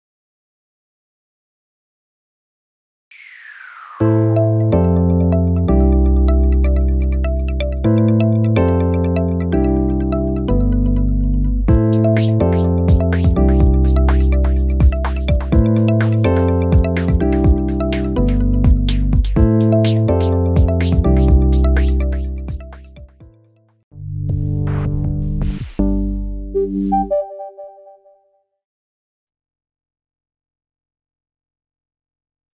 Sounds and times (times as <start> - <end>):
Music: 4.0 - 28.4.